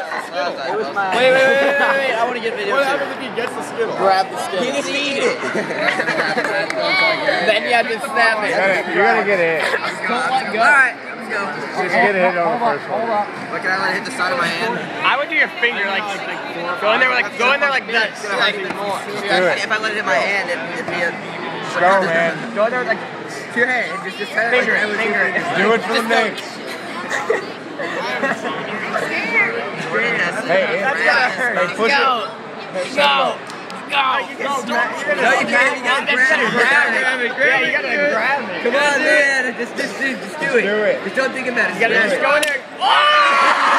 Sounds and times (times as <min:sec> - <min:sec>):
Inside, public space: 0:00.0 - 0:43.7.